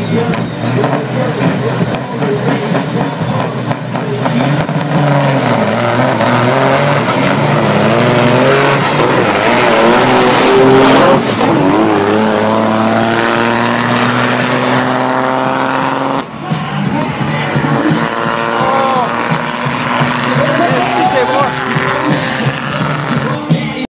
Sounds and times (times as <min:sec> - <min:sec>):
Speech: 0:00.0 - 0:04.6, 0:20.3 - 0:22.2
Truck: 0:00.0 - 0:23.9
Music: 0:16.1 - 0:23.9.